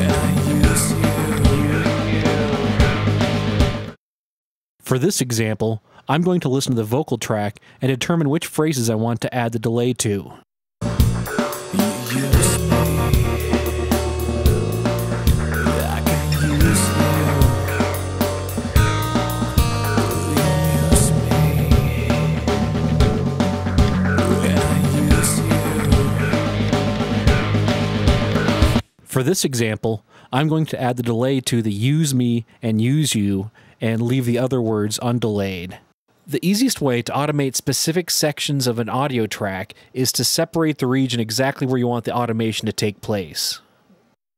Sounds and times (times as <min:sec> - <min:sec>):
Speech: 0:00.0 - 0:02.4, 0:04.8 - 0:10.5, 0:11.8 - 0:13.6, 0:15.7 - 0:17.7, 0:20.2 - 0:22.2, 0:24.2 - 0:26.3, 0:29.1 - 0:43.7
Music: 0:00.0 - 0:04.0, 0:10.8 - 0:28.8.